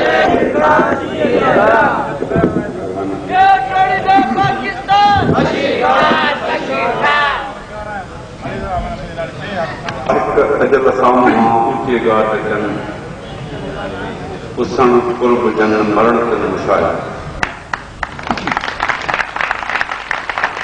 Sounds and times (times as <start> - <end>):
Male speech, man speaking: 2.2 - 5.2, 7.7 - 12.9, 13.6 - 17.1
Narration, monologue: 7.6 - 13.2, 14.5 - 17.4.